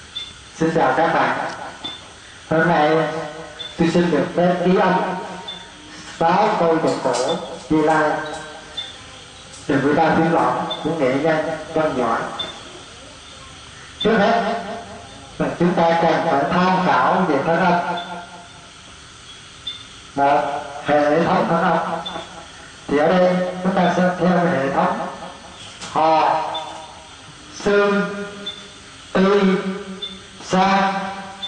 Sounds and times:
Speech: 0.6s - 1.5s, 3.8s - 5.2s, 6.2s - 18.0s, 20.2s - 21.9s.

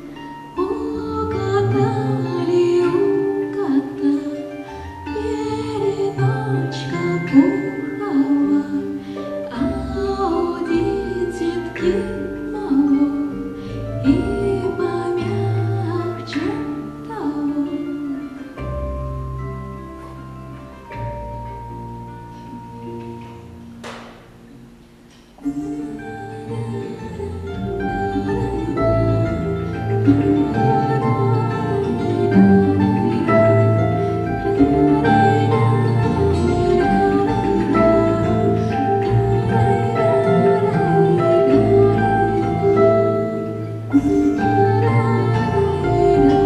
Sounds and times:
Lullaby: 0.0s - 20.8s.

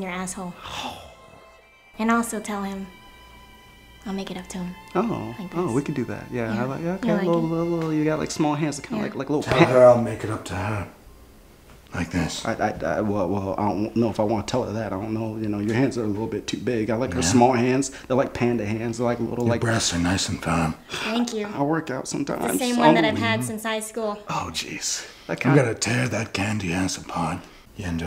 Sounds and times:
Speech: 5.7s - 10.9s, 12.0s - 23.6s, 25.3s - 28.0s.

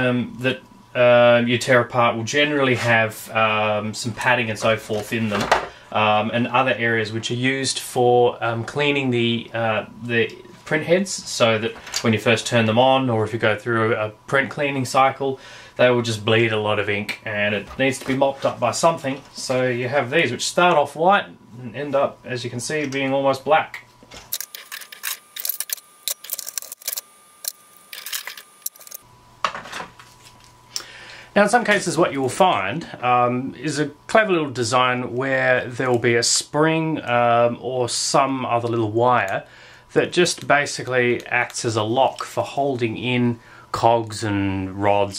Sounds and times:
Speech: 0.0s - 23.9s, 31.4s - 45.1s.

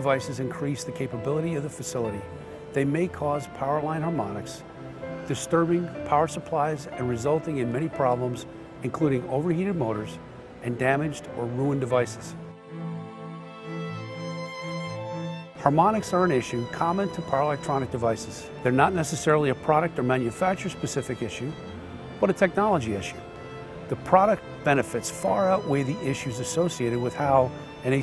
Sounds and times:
Speech: 0.0s - 4.6s, 5.3s - 12.4s, 15.6s - 21.6s, 22.2s - 23.2s, 23.9s - 28.0s
Music: 0.0s - 28.0s.

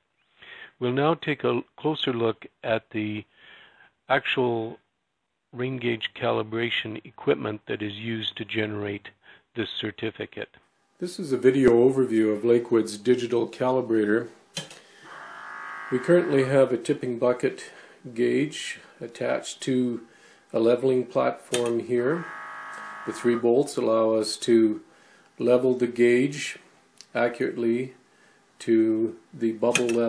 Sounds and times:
Speech: 0.8s - 3.3s, 4.1s - 4.8s, 5.5s - 14.4s, 16.0s - 22.2s, 23.1s - 24.8s, 25.4s - 28.0s, 28.6s - 30.0s.

